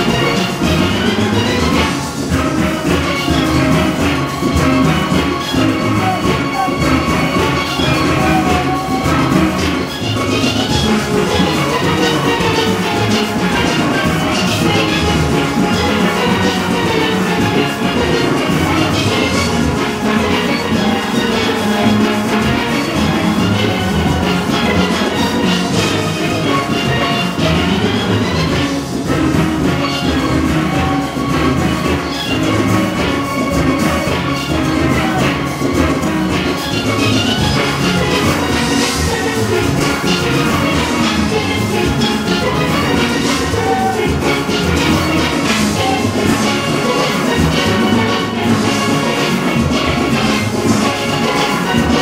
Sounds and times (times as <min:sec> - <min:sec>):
Orchestra: 0:00.0 - 0:52.0.